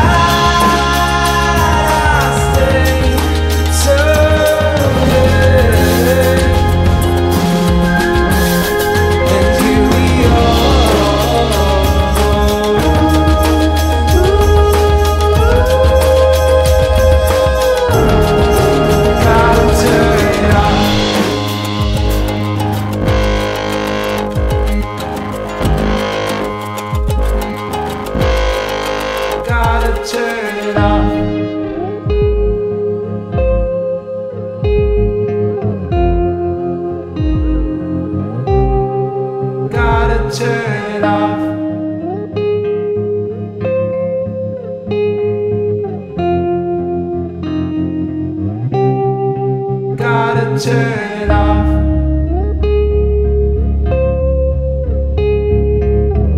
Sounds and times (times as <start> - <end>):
Music: 0.0 - 56.3.